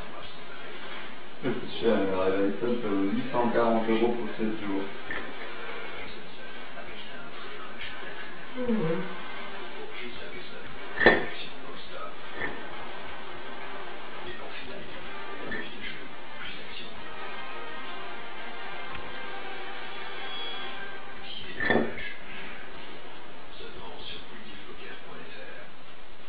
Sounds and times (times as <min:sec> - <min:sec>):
Music: 0:00.0 - 0:25.5.